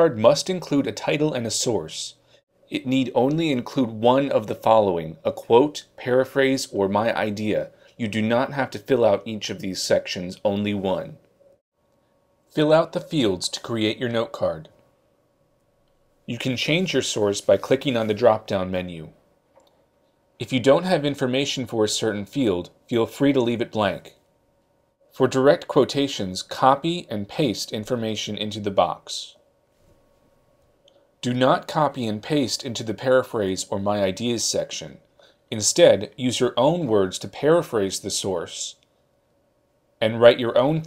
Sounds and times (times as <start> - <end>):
Speech: 0.0 - 11.3, 12.5 - 14.8, 16.3 - 19.2, 20.4 - 24.2, 25.1 - 29.4, 31.2 - 38.9, 40.0 - 40.8.